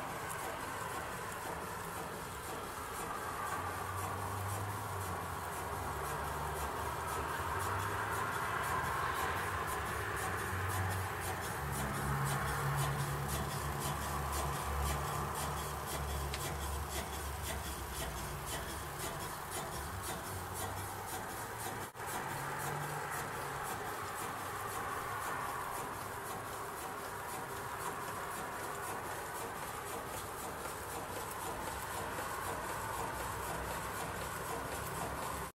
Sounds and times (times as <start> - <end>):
Medium engine (mid frequency): 0.0 - 35.5.